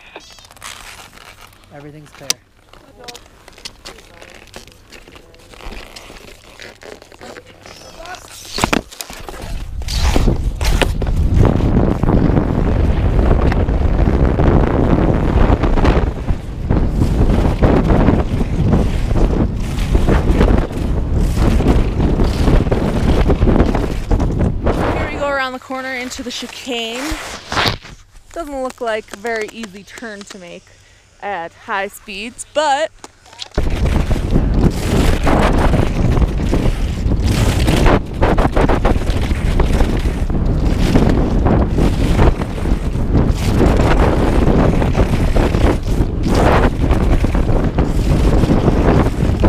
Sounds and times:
Wind noise (microphone): 0:07.8 - 0:29.4, 0:33.6 - 0:49.4.

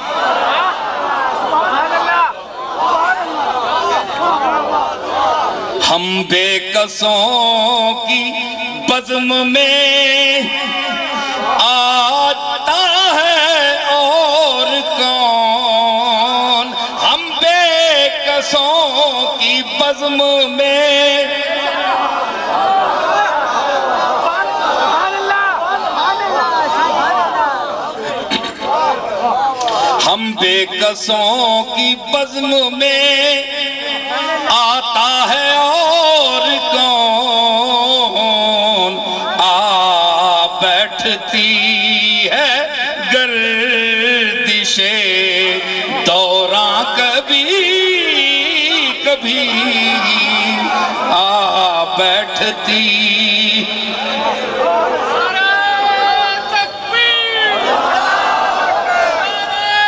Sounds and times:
Speech: 0:00.6 - 0:57.7.

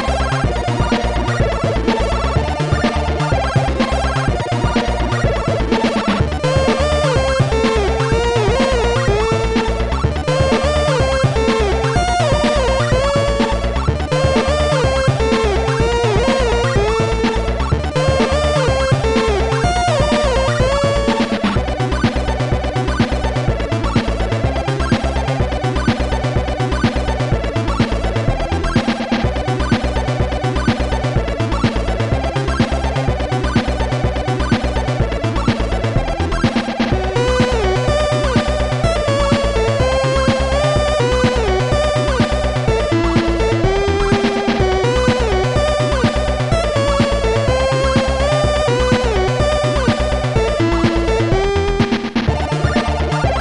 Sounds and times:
Background music: 0:00.0 - 0:53.4.

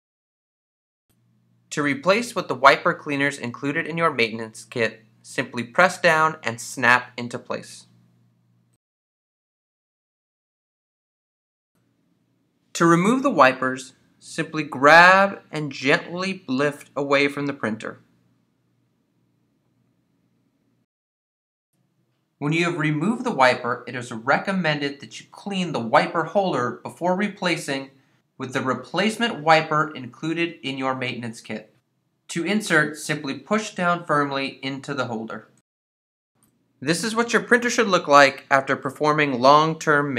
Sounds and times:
Speech: 0:01.7 - 0:08.0, 0:12.7 - 0:18.1, 0:22.4 - 0:35.6, 0:36.8 - 0:40.1.

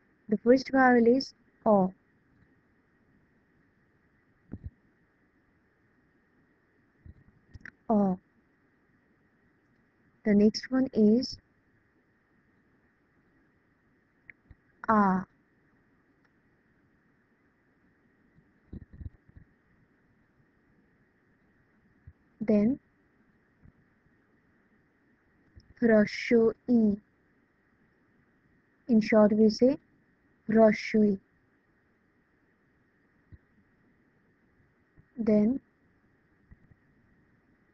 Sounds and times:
Speech: 0:00.3 - 0:01.9, 0:07.9 - 0:08.2, 0:10.3 - 0:11.4, 0:14.8 - 0:15.3, 0:22.4 - 0:22.8, 0:25.8 - 0:27.0, 0:28.9 - 0:29.8, 0:30.5 - 0:31.2, 0:35.2 - 0:35.6.

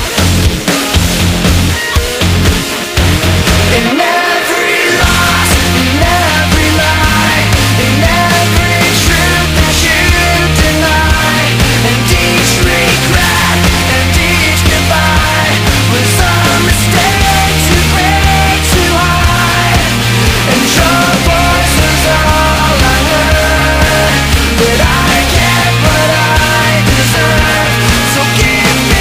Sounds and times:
Music: 0:00.0 - 0:29.0.

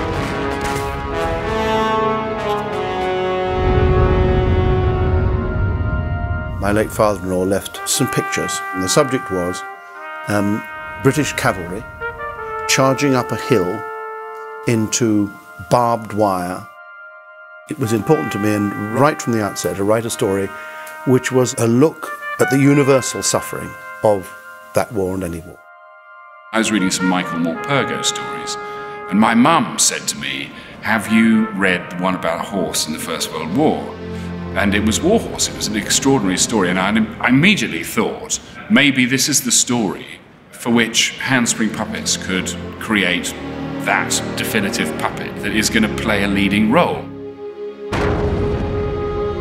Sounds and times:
Music: 0:00.0 - 0:38.7, 0:39.3 - 0:49.4
Speech: 0:06.6 - 0:09.7, 0:10.3 - 0:11.8, 0:12.7 - 0:13.8, 0:14.7 - 0:16.7, 0:17.7 - 0:25.6, 0:26.6 - 0:34.0, 0:34.6 - 0:47.1.

